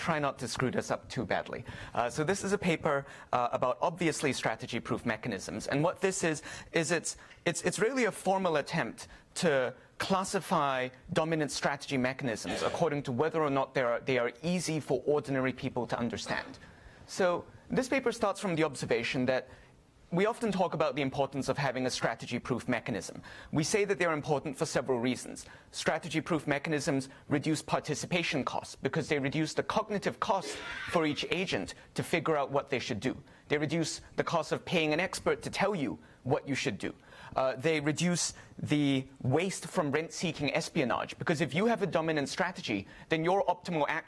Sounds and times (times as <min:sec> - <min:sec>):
Speech: 0:00.0 - 0:19.5, 0:20.1 - 0:44.0.